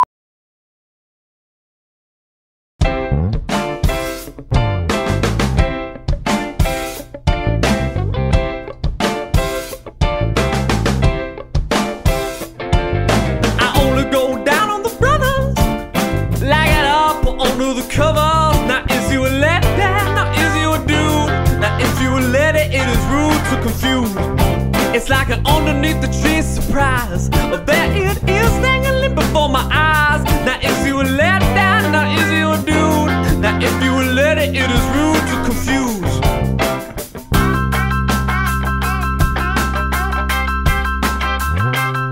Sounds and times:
Rhythm and blues: 2.8 - 42.1.

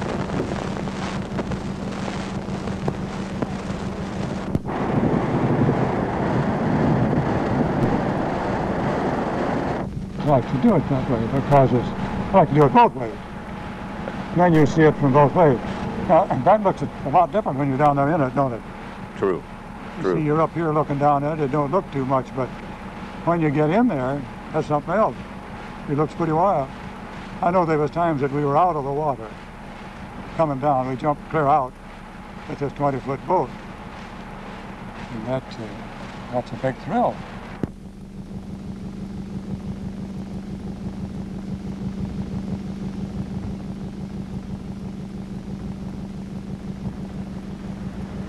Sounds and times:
Speech: 10.2 - 13.2, 14.3 - 18.6, 19.2 - 19.4, 20.0 - 22.6, 23.2 - 25.2, 25.9 - 26.7, 27.4 - 29.4, 30.4 - 31.7, 32.5 - 33.5, 35.1 - 37.2.

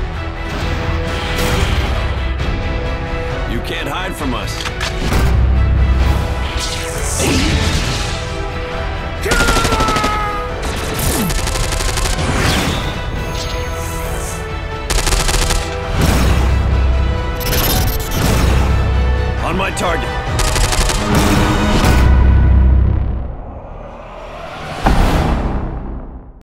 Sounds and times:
Music: 0.0 - 26.4
Speech: 3.5 - 4.6, 19.4 - 20.2.

